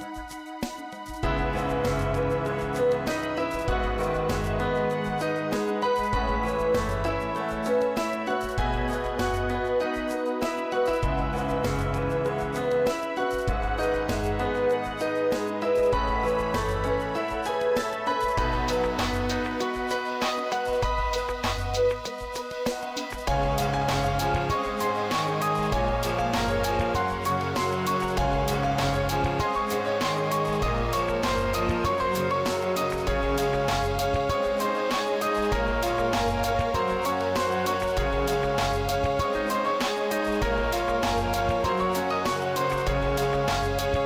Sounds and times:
Happy music: 0:00.0 - 0:44.0.

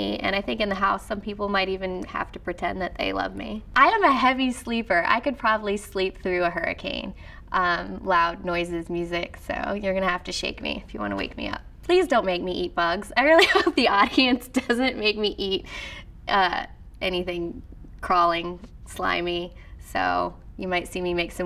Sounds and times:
Speech: 0:00.0 - 0:15.7, 0:16.3 - 0:21.4.

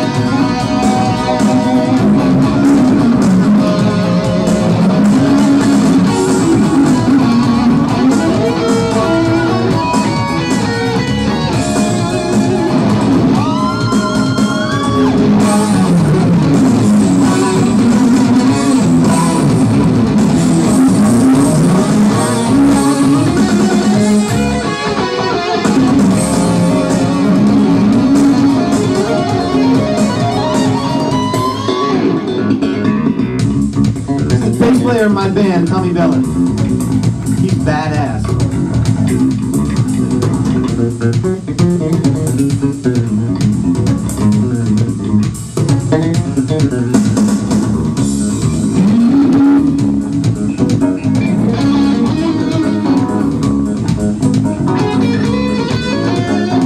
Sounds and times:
Guitar: 0:00.0 - 0:56.6
Electronic organ: 0:14.2 - 0:56.6.

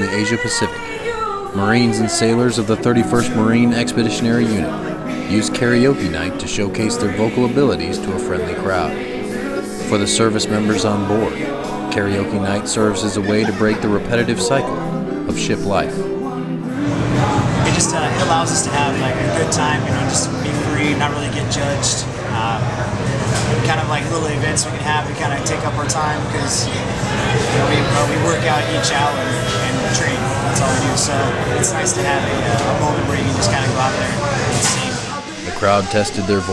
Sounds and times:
Speech: 0:00.0 - 0:09.0, 0:09.8 - 0:16.0, 0:17.6 - 0:36.5
Male singing: 0:00.0 - 0:22.7, 0:23.6 - 0:36.5
Music: 0:00.0 - 0:36.5.

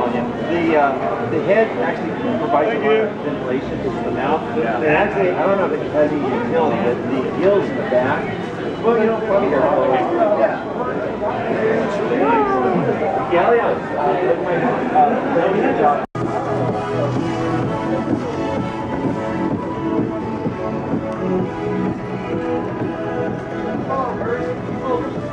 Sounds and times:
Speech: 0:00.0 - 0:16.1.

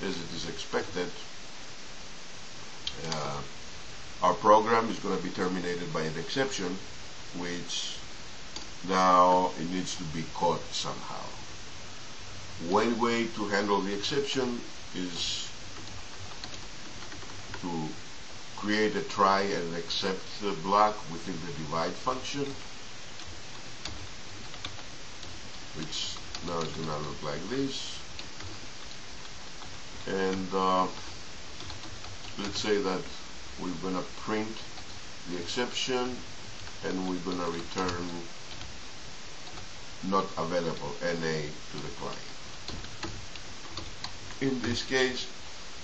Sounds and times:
Speech: 0:00.0 - 0:01.3, 0:02.9 - 0:03.5, 0:04.2 - 0:08.0, 0:08.8 - 0:11.4, 0:12.6 - 0:15.6, 0:17.6 - 0:18.0, 0:18.6 - 0:22.6, 0:25.8 - 0:28.0, 0:30.1 - 0:31.1, 0:32.4 - 0:34.7, 0:35.3 - 0:36.2, 0:36.8 - 0:38.3, 0:40.0 - 0:42.3, 0:44.4 - 0:45.3.

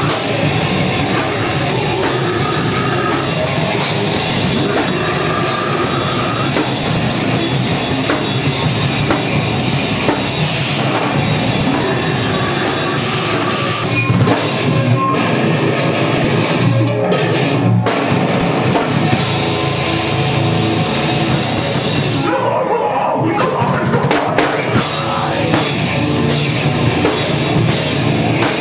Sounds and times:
Heavy metal: 0:00.0 - 0:28.6.

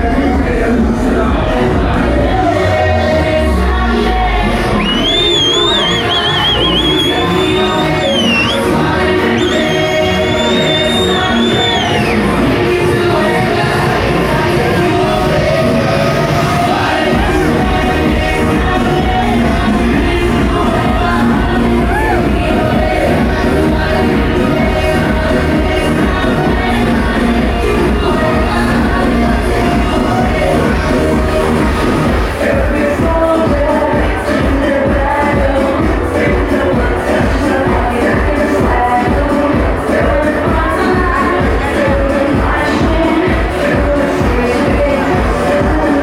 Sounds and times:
Music: 0:00.0 - 0:46.0.

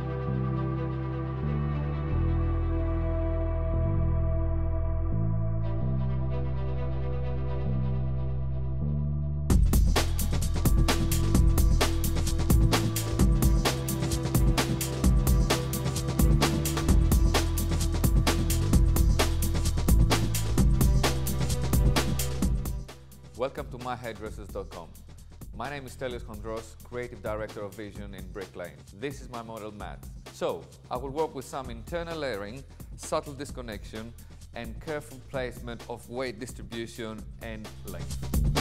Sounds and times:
Music: 0:00.0 - 0:38.6
Speech: 0:23.4 - 0:25.0, 0:25.6 - 0:38.2.

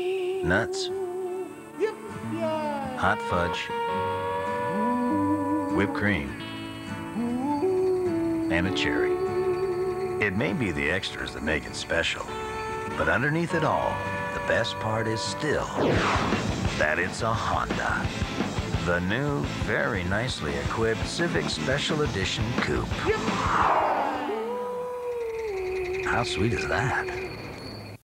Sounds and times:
Music: 0:00.0 - 0:27.1
Speech: 0:10.2 - 0:12.3, 0:13.0 - 0:15.8, 0:16.8 - 0:18.1, 0:18.8 - 0:23.5, 0:26.1 - 0:27.2.

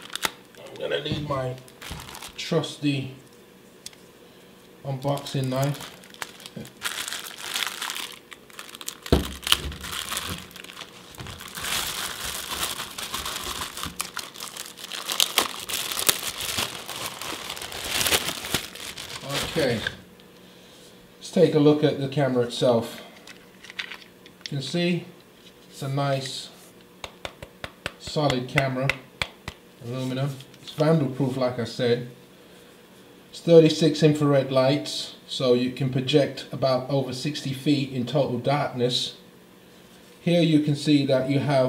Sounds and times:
Crumpling, crinkling: 0:00.0 - 0:00.6, 0:01.4 - 0:02.5, 0:05.0 - 0:20.0
Speech: 0:00.6 - 0:01.7, 0:02.4 - 0:03.2, 0:04.8 - 0:05.8, 0:19.2 - 0:20.0, 0:21.2 - 0:23.1, 0:24.5 - 0:25.2, 0:25.8 - 0:26.6, 0:28.0 - 0:29.0, 0:29.8 - 0:32.2, 0:33.3 - 0:39.2, 0:40.2 - 0:41.6.

